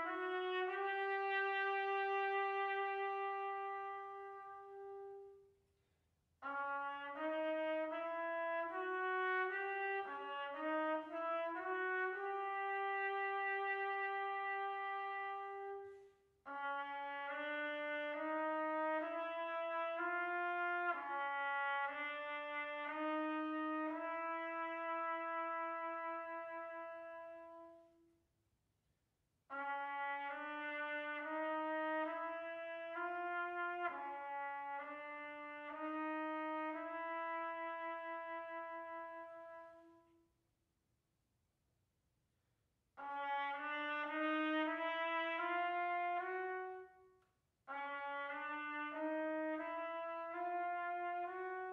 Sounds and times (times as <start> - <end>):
Trombone: 0.0 - 5.4, 6.4 - 28.0, 29.5 - 40.0, 43.0 - 47.0, 47.7 - 51.7
Trumpet: 0.0 - 5.6, 6.4 - 28.2, 29.5 - 40.4, 43.0 - 51.7.